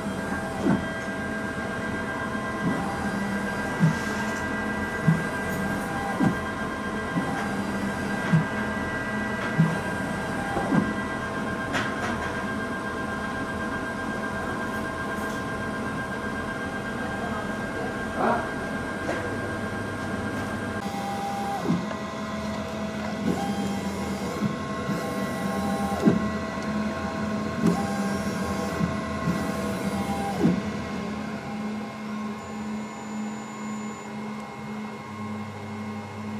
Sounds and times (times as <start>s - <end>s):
Printer: 0.0s - 36.3s
Speech: 17.1s - 18.6s.